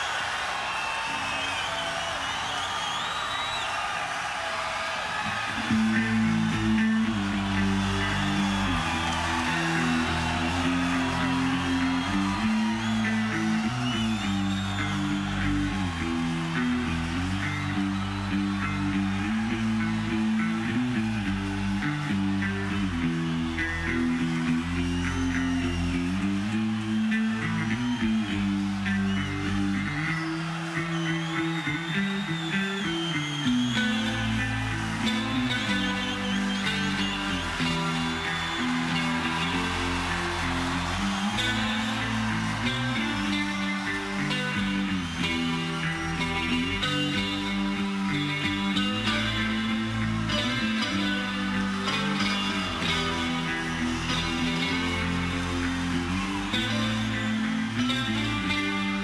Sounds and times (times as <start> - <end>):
Electric guitar: 5.2 - 59.0.